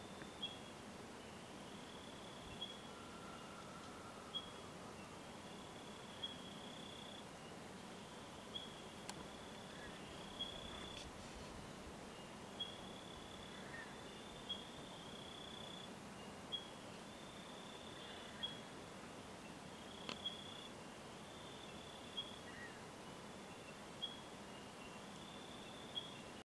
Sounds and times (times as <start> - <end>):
Outside, rural or natural: 0.0 - 26.5.